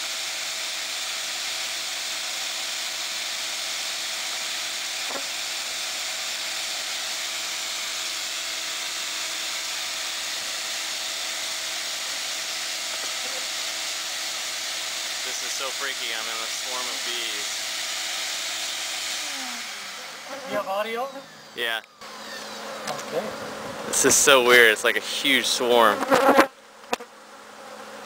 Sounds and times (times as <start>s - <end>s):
Bee, wasp, etc.: 0.0s - 28.0s
Fly, housefly: 1.9s - 16.0s, 19.1s - 28.0s.